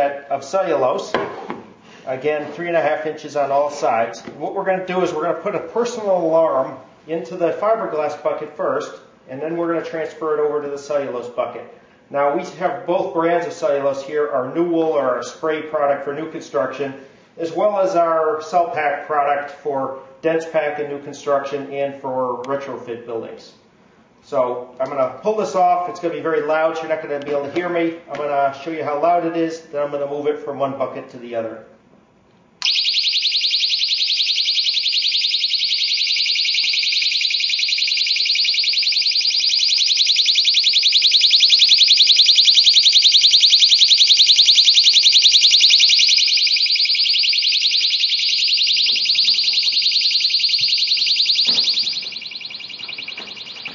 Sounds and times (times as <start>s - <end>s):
Speech: 0.0s - 1.2s, 2.1s - 23.6s, 24.2s - 31.7s.